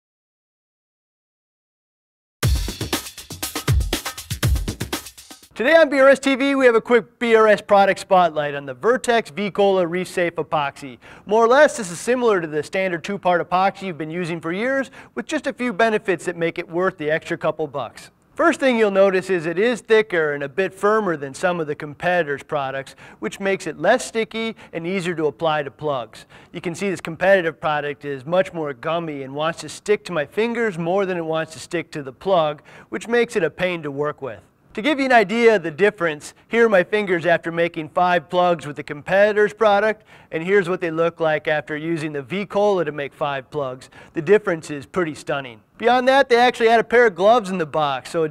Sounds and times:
Music: 2.4s - 5.6s
Speech: 5.6s - 48.3s.

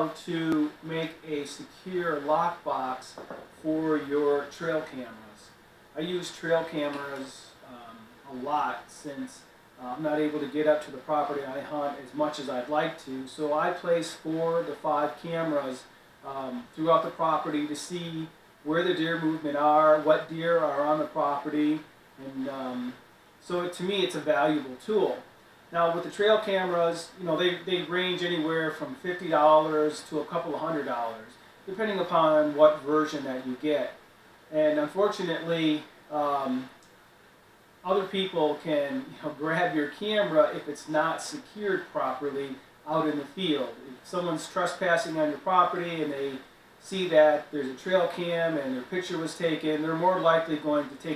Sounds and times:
Speech: 0.0s - 36.8s, 37.8s - 51.1s.

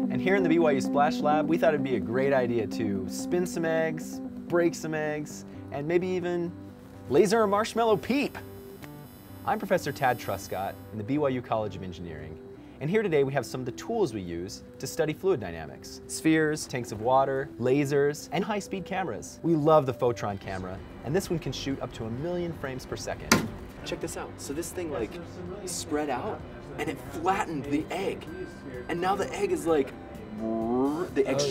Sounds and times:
Music: 0.0s - 31.5s.

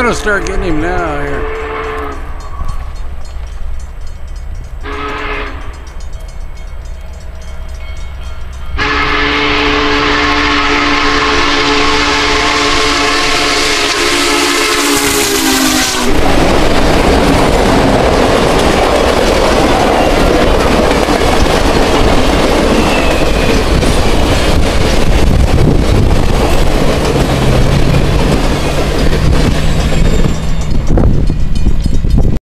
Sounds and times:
Outside, urban or manmade: 0.0s - 32.4s
Railroad car, train wagon: 0.0s - 32.4s
Train: 0.0s - 32.4s.

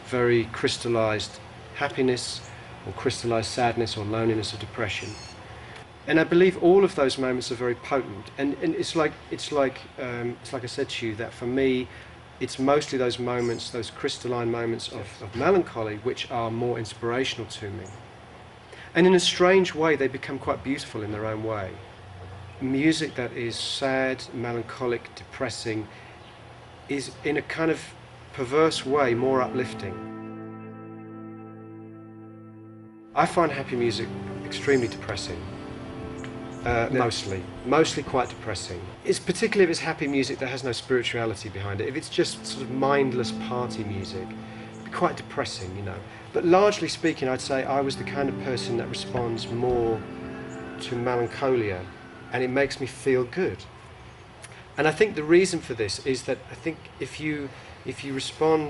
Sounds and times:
Speech: 0.0s - 5.3s, 6.1s - 18.0s, 18.9s - 21.9s, 22.6s - 25.9s, 26.9s - 30.0s, 33.2s - 35.6s, 36.6s - 50.1s, 50.8s - 53.7s, 54.8s - 58.7s.

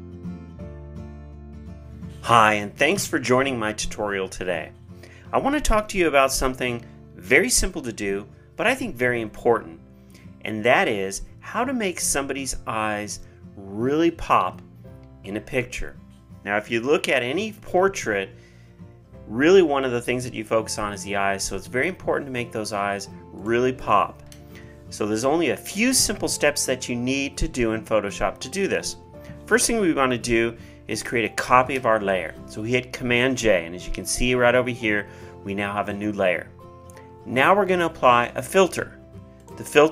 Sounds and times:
Music: 0.0s - 39.9s
Speech: 2.2s - 4.7s, 5.3s - 9.8s, 10.4s - 14.6s, 15.3s - 18.3s, 19.3s - 24.2s, 24.9s - 36.5s, 37.3s - 39.9s.

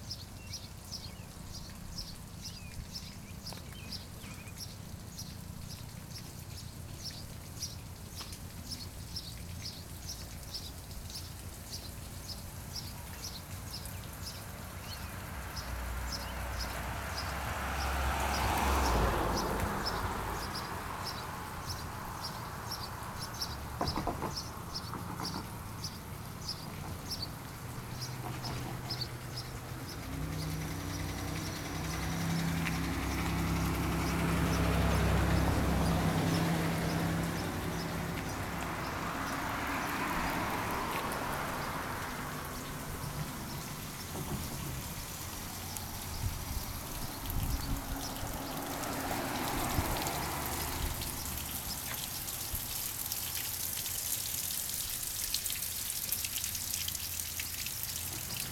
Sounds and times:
Vehicle: 0.0s - 58.5s.

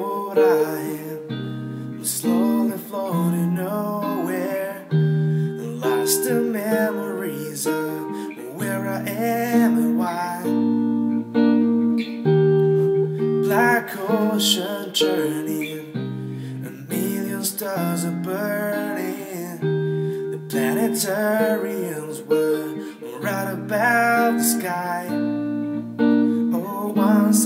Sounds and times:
Music: 0.0s - 27.4s.

